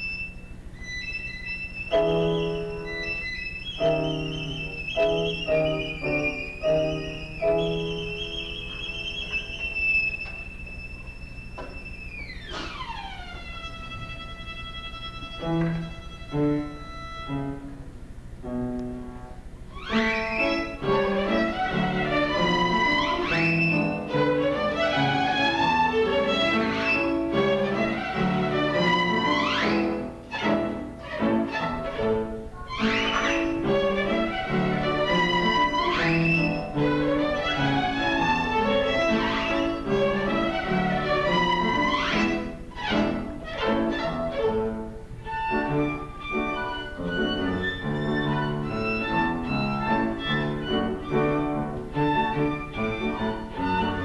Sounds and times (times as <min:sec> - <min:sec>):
Violin, fiddle: 0:00.0 - 0:17.8, 0:19.7 - 0:54.0.